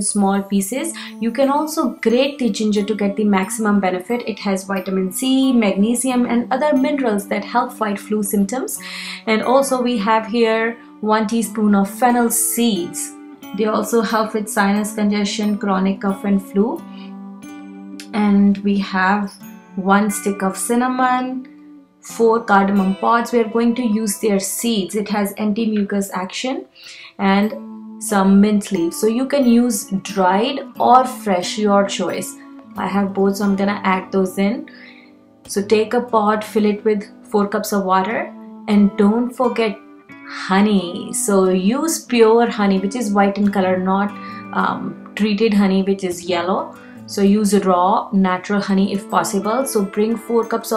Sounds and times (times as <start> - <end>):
Speech: 0.0 - 16.8, 18.0 - 21.5, 22.1 - 34.7, 35.5 - 50.7
Music: 0.0 - 50.7.